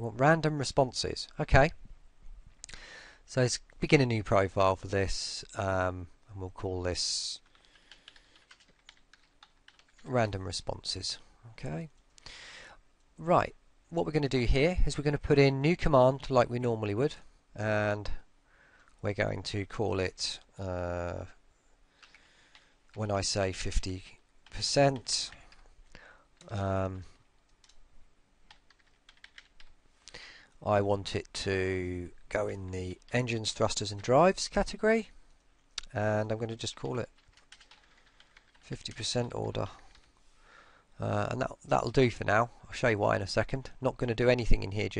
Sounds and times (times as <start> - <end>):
Speech: 0.0 - 1.8, 3.3 - 7.4, 10.0 - 12.0, 13.2 - 18.3, 19.0 - 21.4, 23.0 - 25.4, 26.5 - 27.1, 30.6 - 35.2, 35.8 - 37.1, 38.6 - 39.9, 41.0 - 44.9.